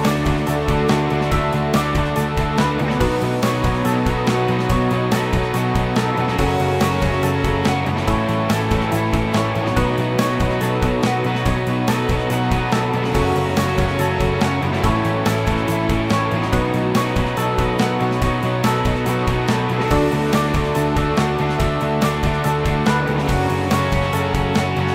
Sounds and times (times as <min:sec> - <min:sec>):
Music: 0:00.0 - 0:24.9.